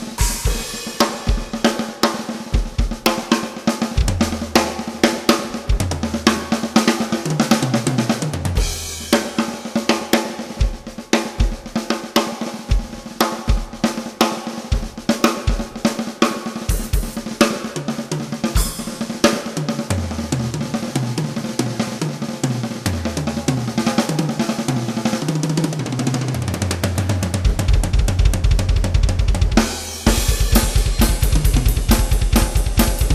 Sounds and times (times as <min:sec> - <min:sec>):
Drum kit: 0:00.0 - 0:33.1
Snare drum: 0:00.0 - 0:33.1.